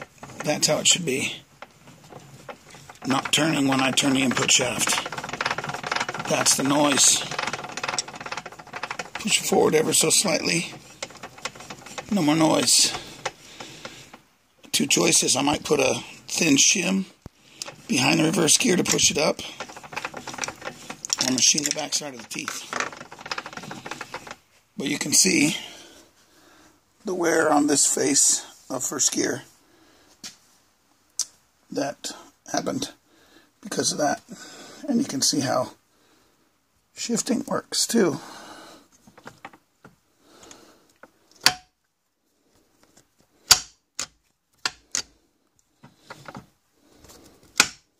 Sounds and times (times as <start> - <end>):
Speech: 0.4 - 1.4, 3.0 - 5.1, 6.2 - 7.4, 9.2 - 10.8, 12.1 - 13.1, 14.7 - 17.2, 17.9 - 19.6, 21.2 - 22.7, 24.8 - 25.8, 27.0 - 29.5, 31.7 - 33.0, 33.6 - 35.8, 37.0 - 38.3.